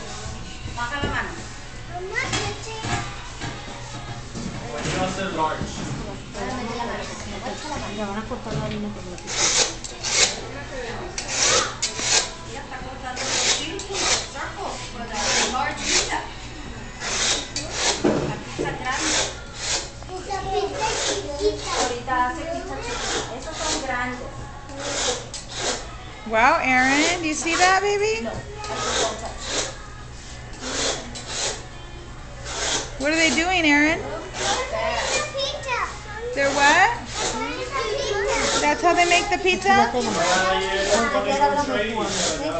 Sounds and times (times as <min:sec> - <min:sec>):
Music: 0:00.0 - 0:42.6.